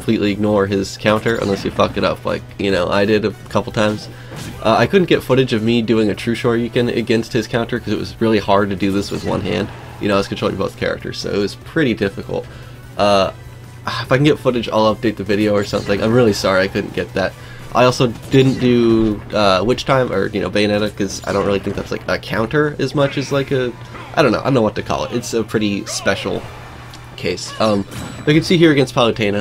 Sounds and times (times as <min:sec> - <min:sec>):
Speech: 0:00.0 - 0:26.5, 0:27.2 - 0:29.4
Music: 0:00.0 - 0:29.4.